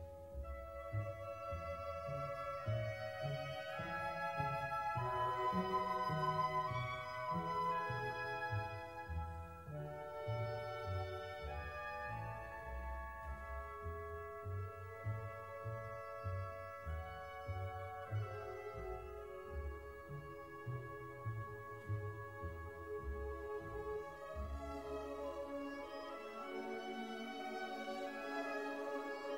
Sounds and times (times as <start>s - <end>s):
Pizzicato: 0.0s - 29.3s.